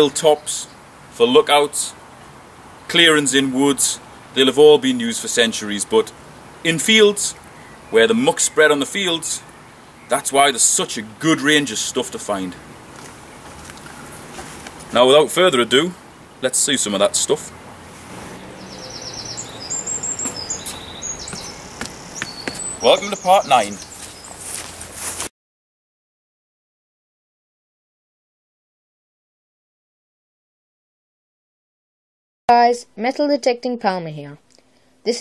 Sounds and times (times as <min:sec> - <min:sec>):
Chirp, tweet: 0:18.4 - 0:24.5
Insect: 0:18.4 - 0:24.8.